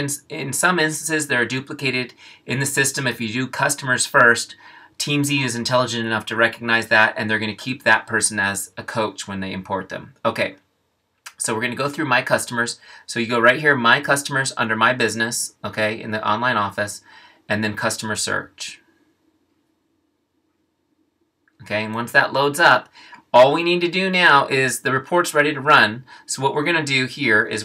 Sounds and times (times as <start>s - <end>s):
Speech: 0.0s - 10.7s, 11.3s - 18.9s, 21.6s - 27.6s.